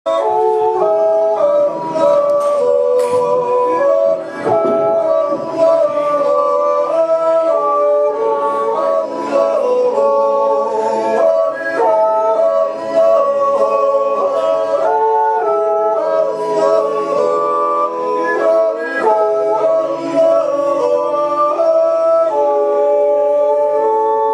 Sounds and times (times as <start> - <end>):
Male singing: 0.1 - 24.3
Yodeling: 0.1 - 24.3.